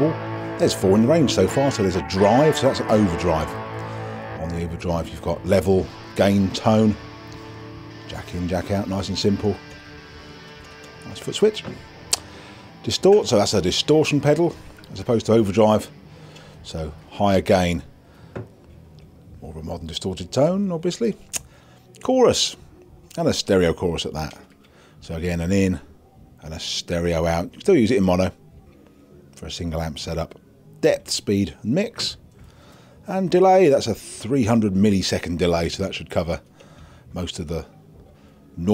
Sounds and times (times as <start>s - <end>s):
Speech: 0.0s - 3.6s, 4.4s - 7.0s, 8.1s - 9.6s, 11.0s - 11.8s, 12.8s - 15.9s, 16.6s - 17.9s, 19.4s - 21.2s, 22.0s - 24.4s, 25.0s - 28.5s, 29.4s - 32.2s, 33.0s - 36.4s, 37.1s - 37.8s
Music: 0.0s - 38.7s.